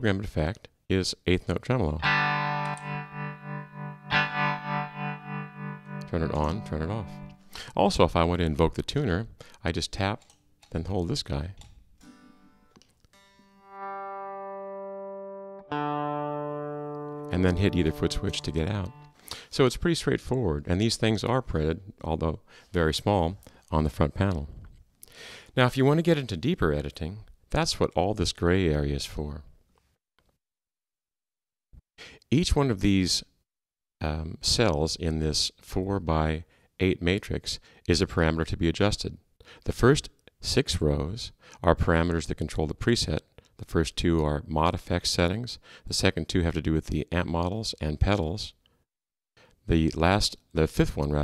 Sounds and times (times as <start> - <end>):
Speech: 0.0 - 2.0, 6.1 - 11.6, 17.3 - 24.7, 25.6 - 29.5, 32.3 - 33.4, 34.0 - 48.6, 49.7 - 51.2
Inside, small room: 0.0 - 30.4
Effects unit: 2.0 - 7.6, 12.0 - 19.2
Electronic tuner: 2.0 - 7.6, 12.0 - 19.2
Guitar: 2.0 - 7.7, 12.0 - 19.5.